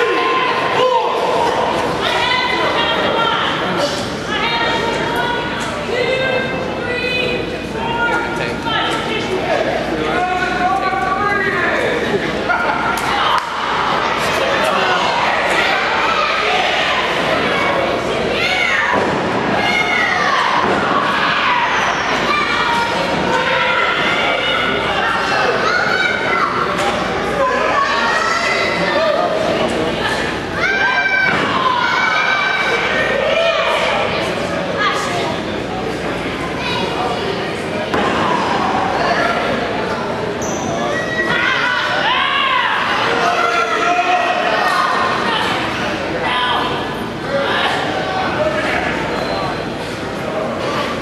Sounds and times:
Inside, large room or hall: 0.0s - 51.0s
Speech: 0.0s - 51.0s.

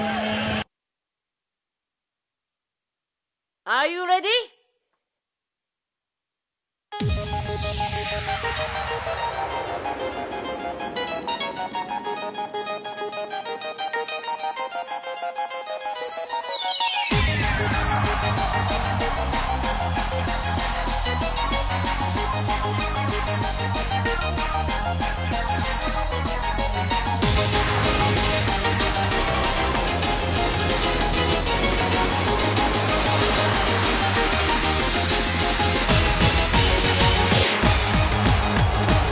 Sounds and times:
Video game music: 7.0s - 39.1s.

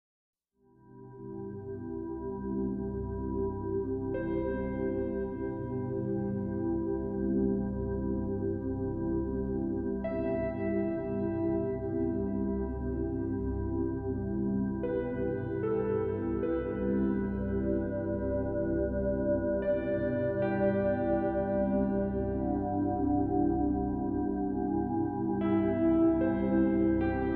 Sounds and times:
New-age music: 0.7s - 27.3s.

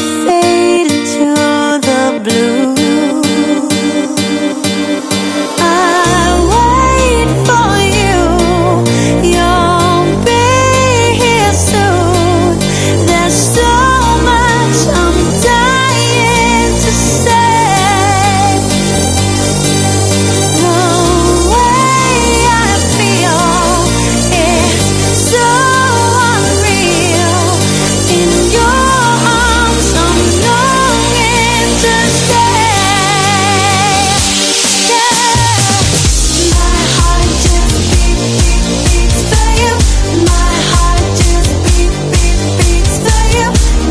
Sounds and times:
Music: 0.0s - 43.9s.

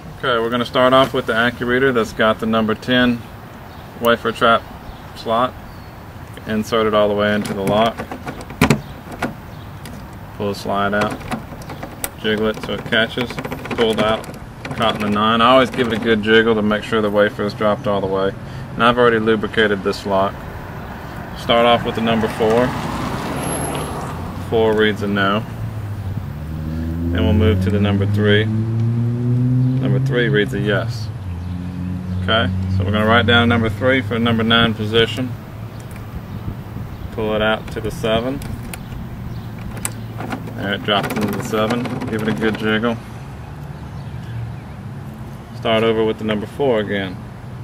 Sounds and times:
Vehicle: 0.0s - 47.6s
Speech: 0.2s - 3.3s, 4.0s - 5.6s, 6.4s - 8.0s, 10.4s - 11.2s, 12.2s - 20.4s, 21.4s - 22.8s, 24.4s - 25.5s, 27.1s - 28.5s, 29.8s - 31.1s, 32.2s - 35.4s, 37.1s - 38.5s, 40.6s - 43.0s, 45.6s - 47.2s.

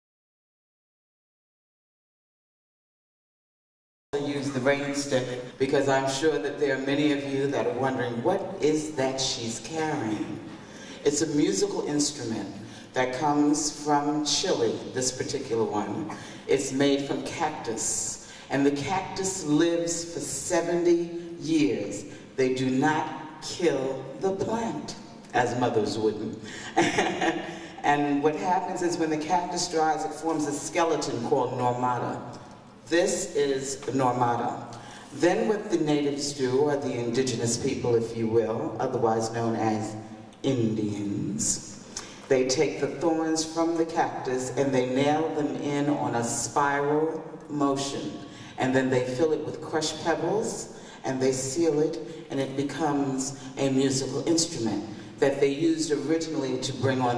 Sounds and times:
Speech: 4.2s - 41.6s, 42.3s - 57.1s.

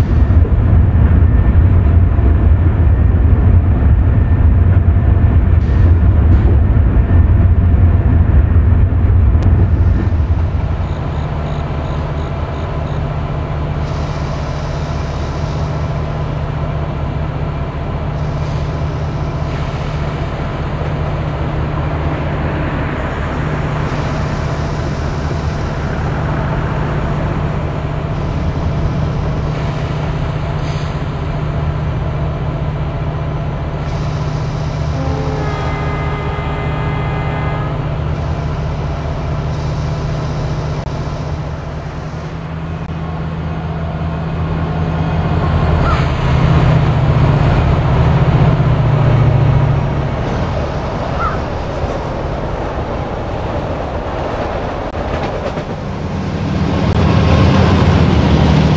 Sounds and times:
Railroad car, train wagon: 0.0s - 58.7s
Train: 0.0s - 58.7s.

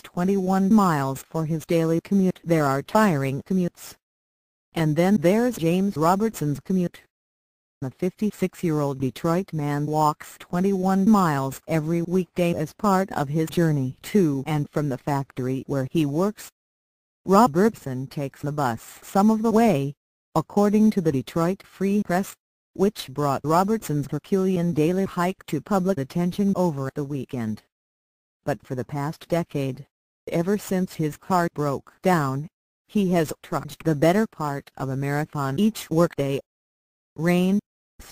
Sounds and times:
Speech: 0.0s - 4.0s, 4.8s - 7.1s, 7.8s - 16.5s, 17.3s - 27.7s, 28.5s - 36.5s, 37.2s - 38.1s.

